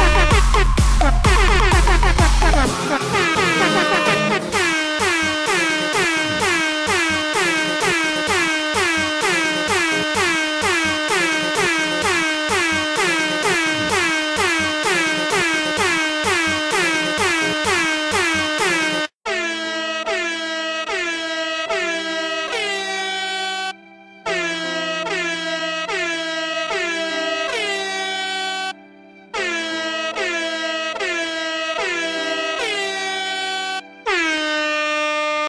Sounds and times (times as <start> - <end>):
Air horn, truck horn: 0.0 - 35.4.